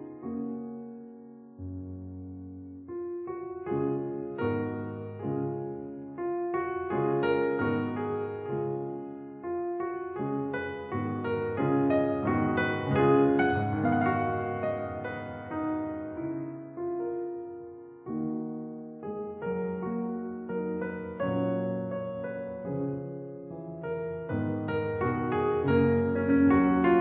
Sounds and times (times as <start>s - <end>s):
Music: 0.0s - 27.0s.